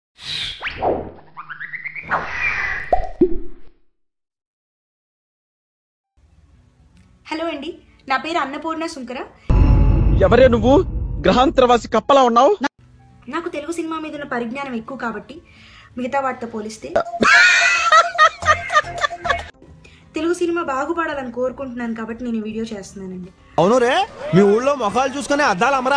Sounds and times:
Music: 6.2 - 9.6, 10.2 - 25.9.

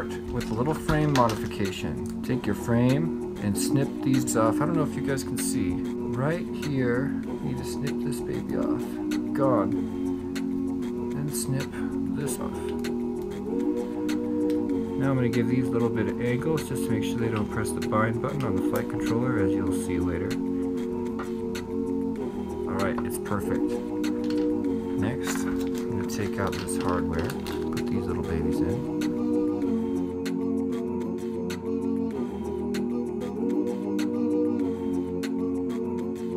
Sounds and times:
Music: 0.0 - 36.3.

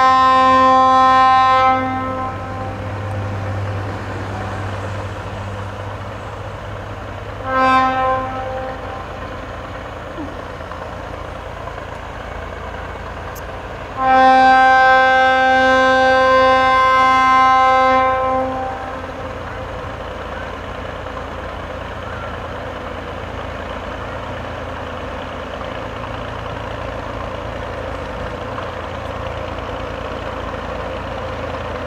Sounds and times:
Vehicle: 0.0 - 31.8.

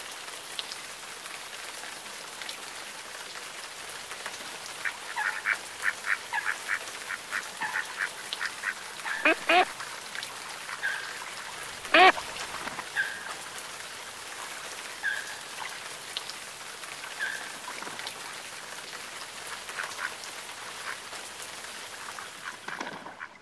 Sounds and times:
Quack: 4.8 - 9.9, 11.8 - 13.2, 19.8 - 20.2, 22.2 - 23.4.

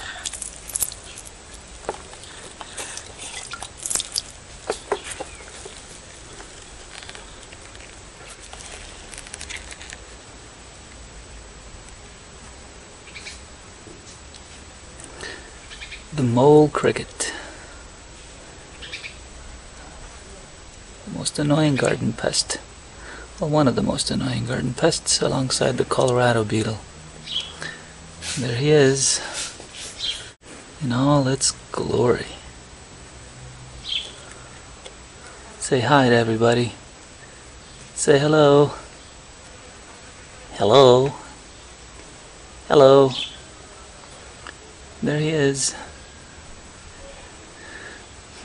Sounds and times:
Speech: 16.1 - 17.5, 20.3 - 22.7, 23.4 - 26.8, 28.4 - 29.4, 30.8 - 32.5, 35.6 - 36.8, 38.0 - 38.9, 40.5 - 41.4, 42.7 - 43.2, 45.0 - 45.9
Bird: 27.2 - 27.8, 33.8 - 34.3, 43.1 - 43.4.

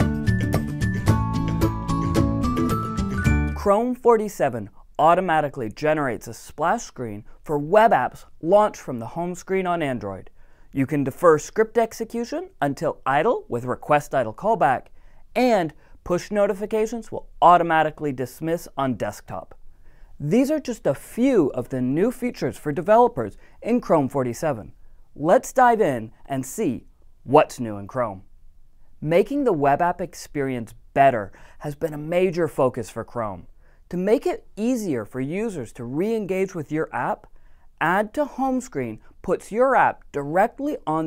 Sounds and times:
Speech: 3.6 - 19.6, 20.2 - 28.3, 29.0 - 41.0.

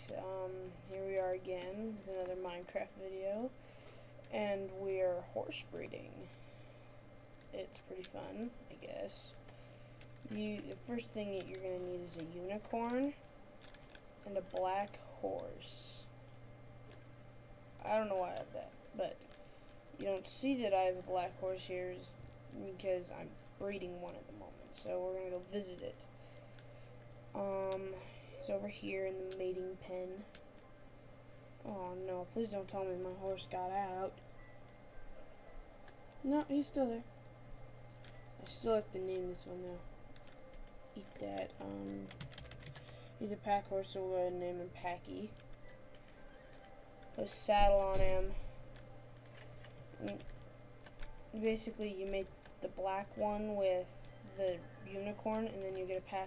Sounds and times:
Speech: 0.0 - 3.6, 4.3 - 6.3, 7.6 - 9.4, 10.2 - 13.2, 14.3 - 16.1, 17.8 - 19.2, 20.0 - 26.1, 27.4 - 30.3, 31.6 - 34.2, 36.2 - 37.1, 38.4 - 39.8, 41.0 - 42.1, 43.2 - 45.4, 47.2 - 48.4, 50.0 - 50.2, 51.4 - 56.2.

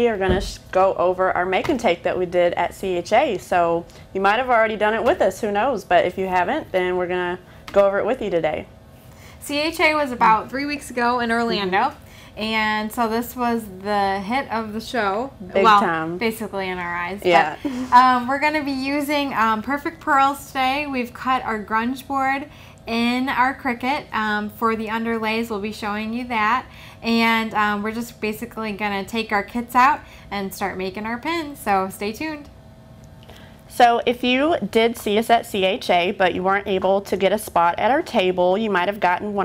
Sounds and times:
Speech: 9.5 - 32.4.

